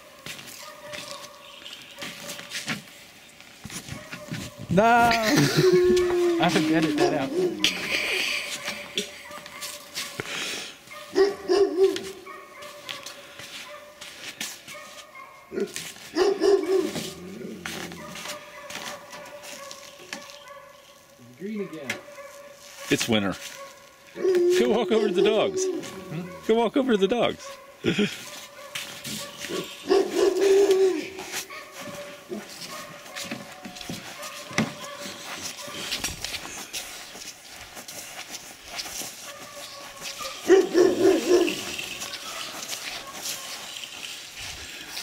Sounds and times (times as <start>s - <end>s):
Outside, rural or natural: 0.0s - 45.0s.